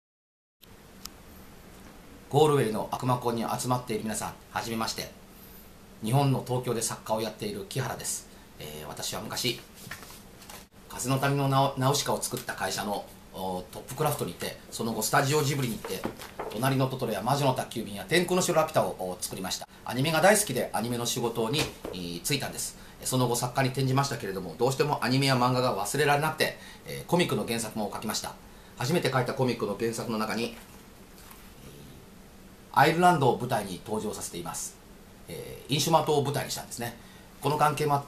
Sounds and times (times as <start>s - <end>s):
Male speech, man speaking: 2.3s - 5.2s, 6.0s - 9.7s, 10.9s - 30.6s, 32.7s - 38.0s.